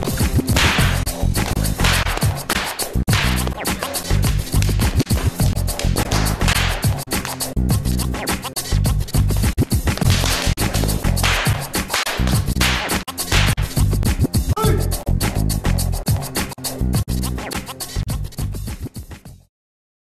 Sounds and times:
Whip: 0:00.2 - 0:07.4, 0:09.9 - 0:13.8.

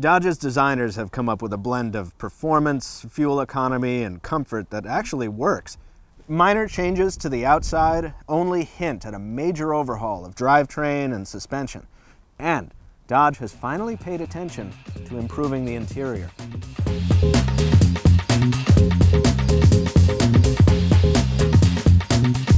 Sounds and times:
Speech: 0:00.0 - 0:16.3
Music: 0:13.5 - 0:22.5.

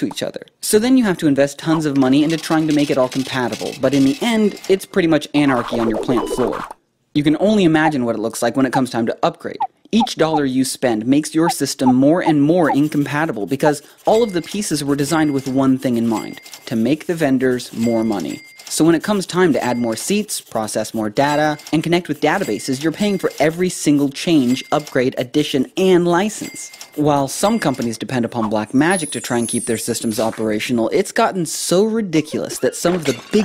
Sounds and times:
Speech: 0:00.0 - 0:33.4.

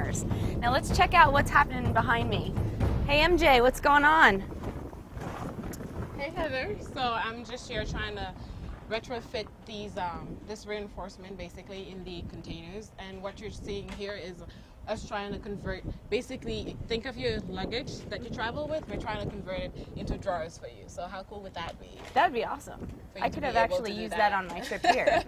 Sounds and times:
Speech: 0:14.9 - 0:25.1.

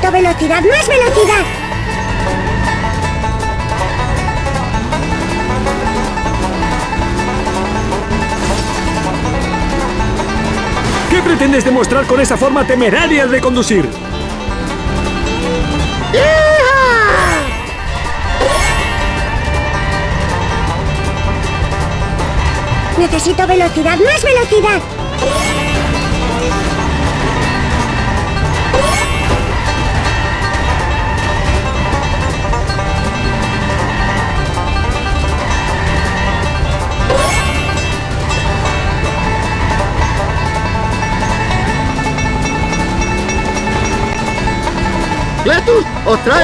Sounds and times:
Music: 0:00.0 - 0:46.4.

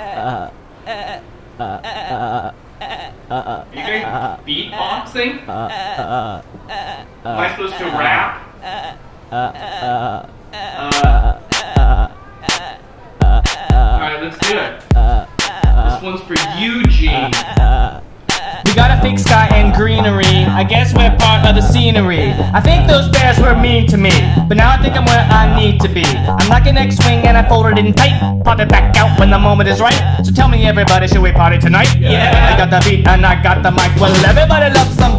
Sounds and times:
Music: 0:10.8 - 0:12.1, 0:13.2 - 0:17.9, 0:18.6 - 0:35.1
Speech: 0:15.9 - 0:17.4, 0:29.8 - 0:33.4.

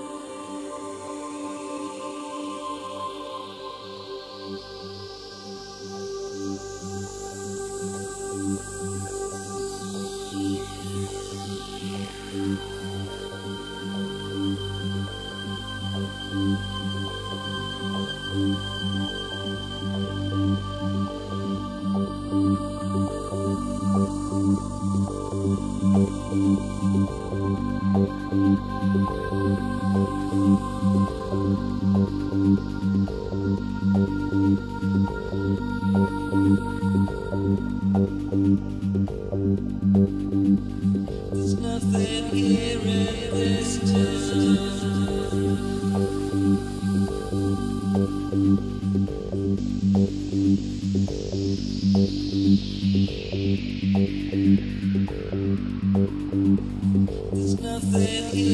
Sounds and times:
Electronic music: 0:06.4 - 0:58.5.

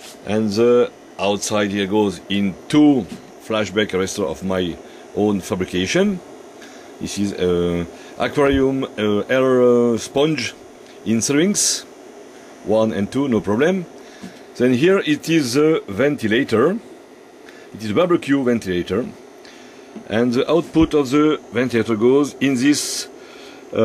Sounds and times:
Speech: 0:00.2 - 0:06.2, 0:07.0 - 0:11.9, 0:12.6 - 0:13.9, 0:14.6 - 0:16.8, 0:17.7 - 0:19.2, 0:20.0 - 0:23.8.

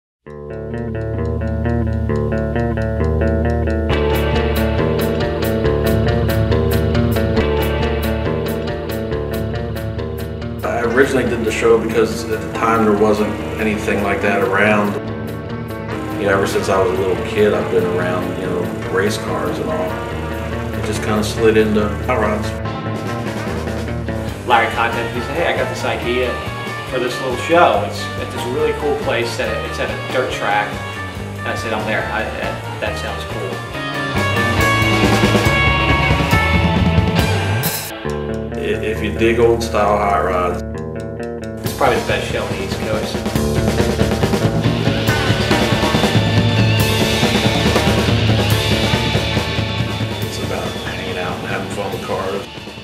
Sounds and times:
Music: 0:00.3 - 0:52.8
Speech: 0:10.6 - 0:15.0, 0:16.0 - 0:20.0, 0:20.8 - 0:22.6, 0:24.4 - 0:33.6, 0:38.6 - 0:40.6, 0:41.7 - 0:43.3, 0:50.3 - 0:52.5.

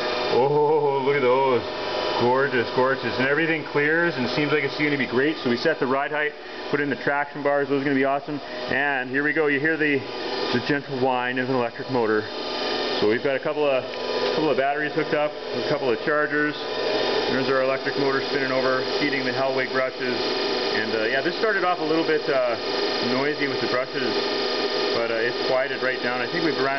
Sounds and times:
Engine: 0:00.0 - 0:26.7
Speech: 0:00.3 - 0:12.3, 0:13.0 - 0:16.6, 0:17.3 - 0:20.2, 0:20.8 - 0:24.2, 0:25.0 - 0:26.7.

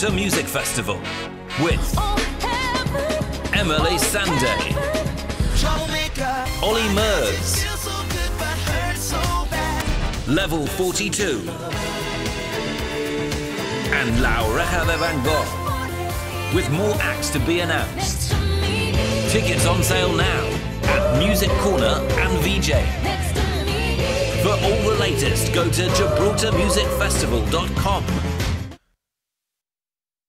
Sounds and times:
Speech: 0:00.0 - 0:02.0, 0:03.5 - 0:04.8, 0:06.6 - 0:07.5, 0:10.3 - 0:11.6, 0:13.9 - 0:15.6, 0:16.5 - 0:18.2, 0:19.3 - 0:22.9, 0:24.4 - 0:28.2
Music: 0:00.0 - 0:28.8.

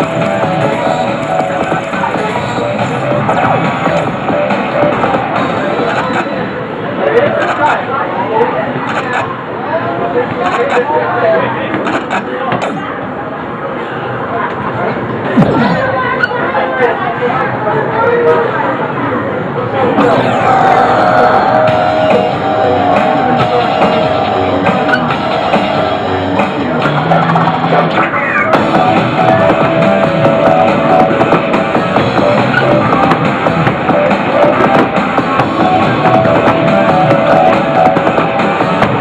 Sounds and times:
Music: 0:00.0 - 0:06.4, 0:20.0 - 0:39.0.

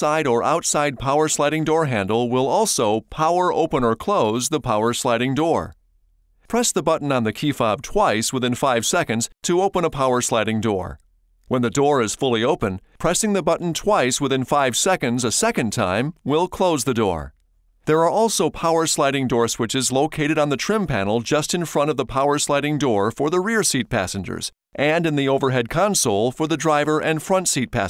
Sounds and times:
Speech: 0:00.0 - 0:05.8, 0:06.5 - 0:27.8.

